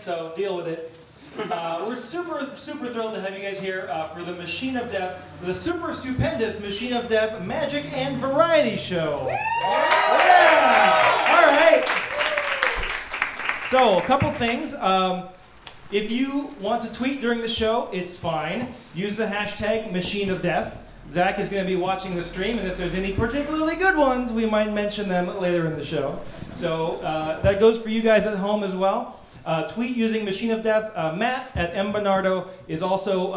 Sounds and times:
Speech: 0:00.0 - 0:09.3, 0:13.7 - 0:15.3, 0:15.9 - 0:33.3.

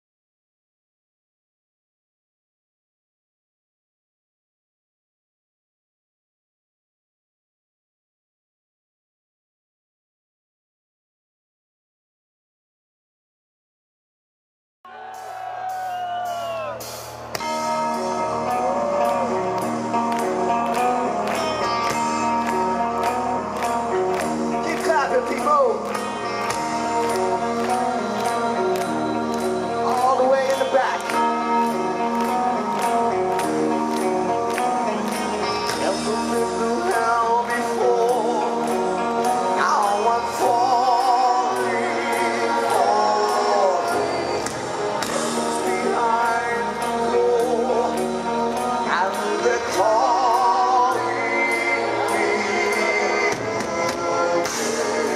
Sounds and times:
Music: 0:14.9 - 0:55.1
Speech: 0:24.6 - 0:25.9.

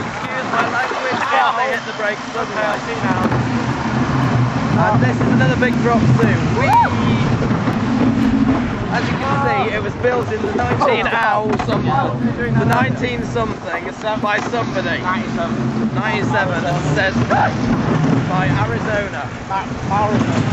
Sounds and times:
Speech: 0:00.0 - 0:03.3, 0:04.8 - 0:06.4, 0:08.9 - 0:17.6, 0:18.3 - 0:20.5.

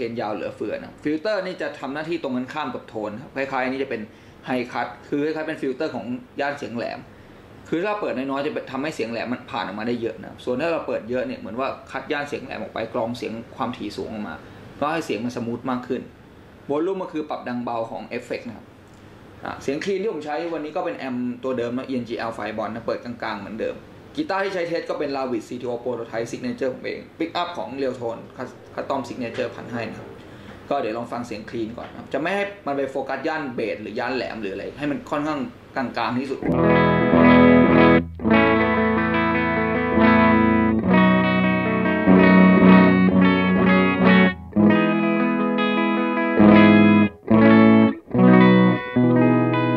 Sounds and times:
Speech: 0:00.0 - 0:07.1, 0:07.7 - 0:18.7, 0:19.4 - 0:30.1, 0:30.7 - 0:36.6.

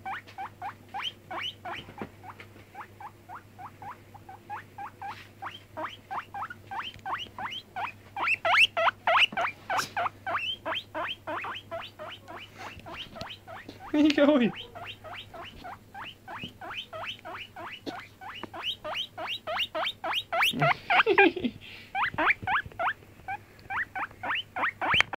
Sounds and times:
Oink: 0:14.5 - 0:20.8.

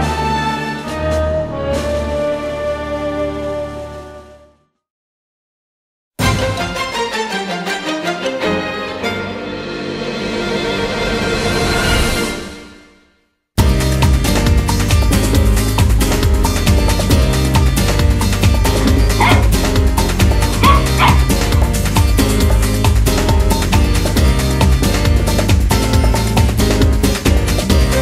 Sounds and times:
Music: 0:00.0 - 0:04.9, 0:06.2 - 0:28.0
Yip: 0:19.2 - 0:19.5, 0:20.6 - 0:21.3
Bow-wow: 0:19.2 - 0:19.6, 0:20.6 - 0:21.7.

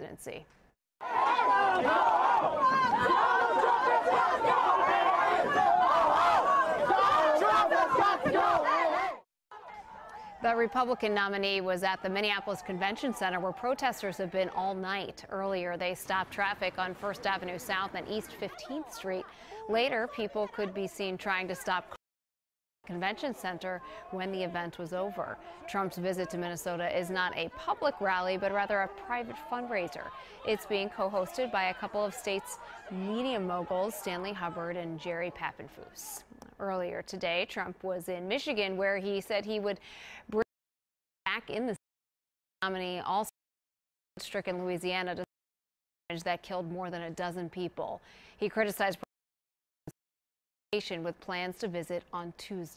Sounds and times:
Speech: 0:00.0 - 0:00.4, 0:10.4 - 0:22.0, 0:22.9 - 0:40.4, 0:41.3 - 0:41.8, 0:42.6 - 0:43.3, 0:44.2 - 0:45.3, 0:46.1 - 0:49.1, 0:50.8 - 0:52.7.

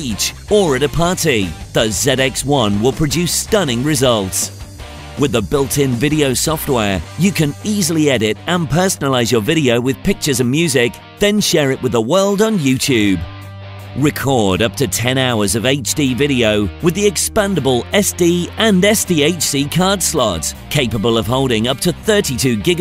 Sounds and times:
Speech: 0:00.0 - 0:04.6, 0:05.2 - 0:13.3, 0:14.0 - 0:22.8
Music: 0:00.0 - 0:22.8.

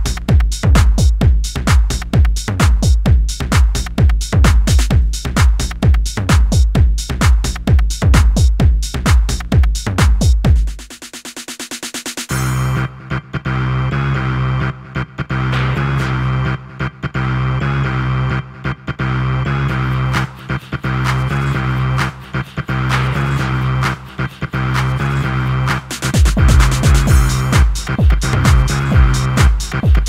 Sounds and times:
Music: 0:00.0 - 0:30.0.

